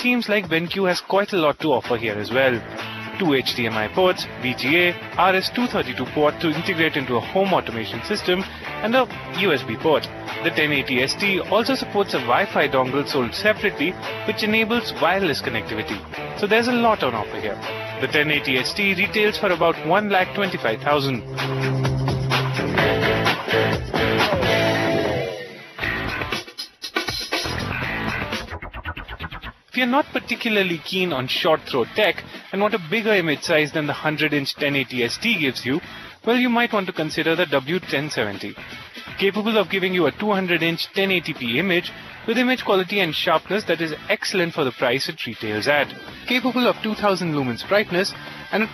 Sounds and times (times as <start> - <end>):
Speech: 0.0 - 21.2, 29.8 - 48.7
Music: 0.0 - 48.7.